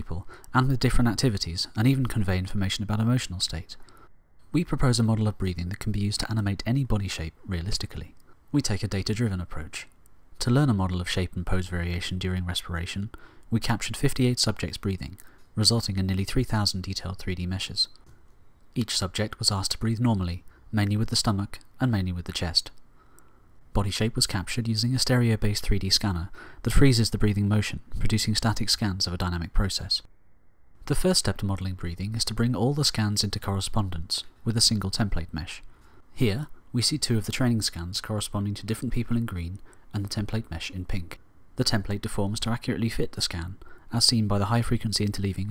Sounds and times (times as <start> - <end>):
Speech: 0.0 - 3.8, 4.5 - 18.0, 18.8 - 22.8, 23.8 - 30.1, 30.8 - 45.5.